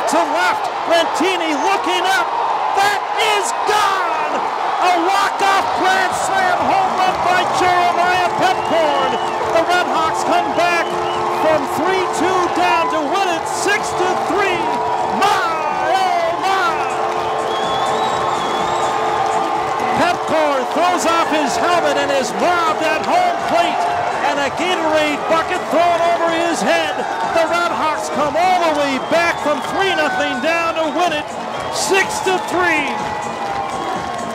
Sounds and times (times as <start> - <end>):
Speech: 0.0 - 16.9, 19.9 - 31.2, 31.8 - 33.0
Music: 4.8 - 34.3.